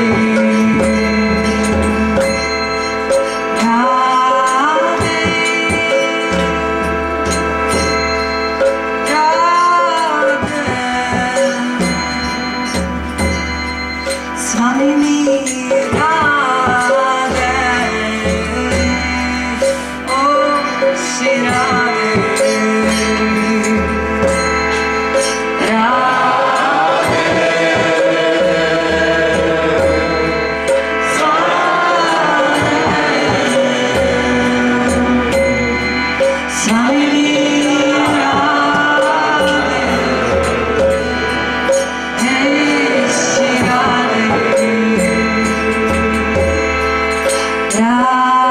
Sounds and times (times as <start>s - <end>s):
Mantra: 0.0s - 2.5s, 3.6s - 6.6s, 9.1s - 12.6s, 14.5s - 24.4s, 25.6s - 41.5s, 42.2s - 46.7s, 47.8s - 48.5s.